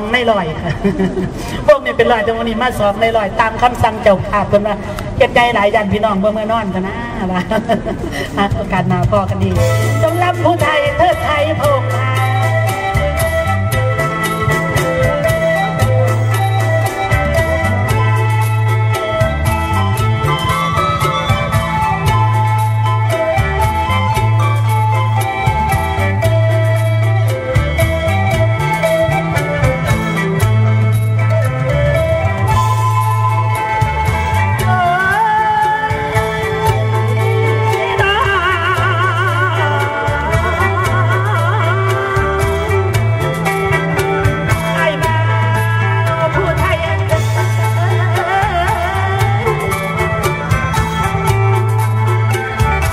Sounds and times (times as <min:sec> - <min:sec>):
Ska: 0:07.1 - 0:52.9.